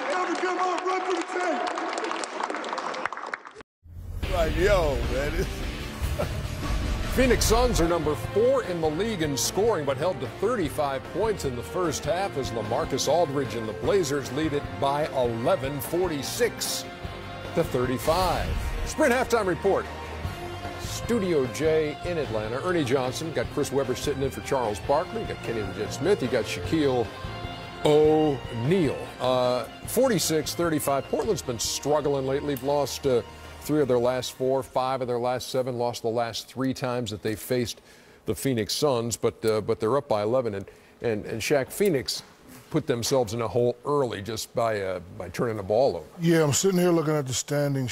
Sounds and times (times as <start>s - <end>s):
Music: 3.9s - 36.1s
Speech: 4.2s - 5.5s, 27.9s - 47.9s.